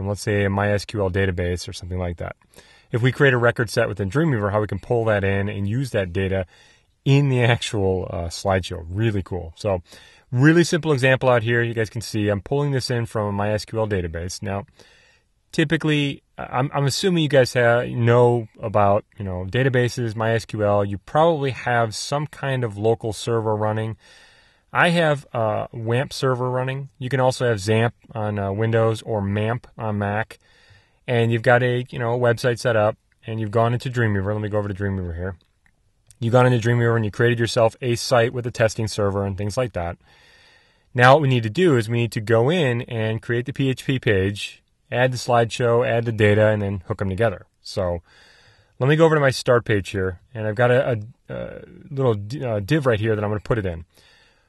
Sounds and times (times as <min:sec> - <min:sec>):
Speech: 0:00.0 - 0:06.5, 0:07.1 - 0:14.7, 0:15.5 - 0:24.0, 0:24.7 - 0:30.4, 0:31.1 - 0:35.4, 0:36.1 - 0:40.0, 0:41.0 - 0:48.0, 0:48.8 - 0:53.9.